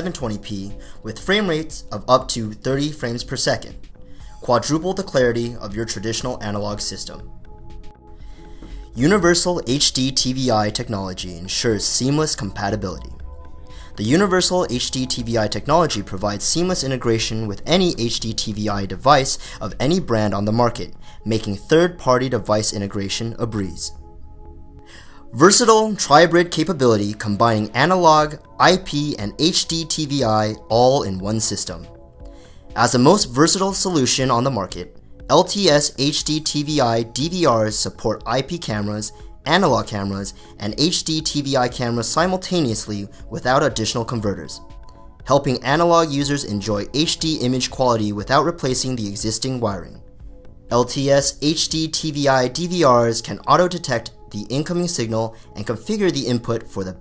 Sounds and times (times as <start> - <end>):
Music: 0.0 - 57.0
Narration, monologue: 0.0 - 57.0.